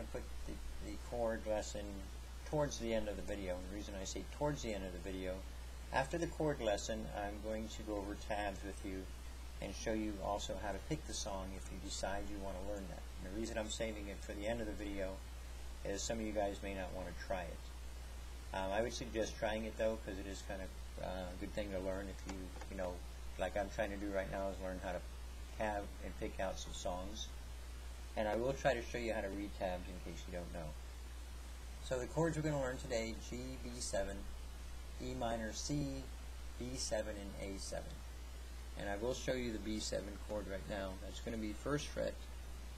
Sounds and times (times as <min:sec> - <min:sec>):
Speech: 0:00.0 - 0:15.2, 0:15.8 - 0:17.8, 0:18.5 - 0:27.4, 0:28.2 - 0:30.8, 0:31.8 - 0:34.4, 0:35.0 - 0:38.0, 0:38.8 - 0:42.3.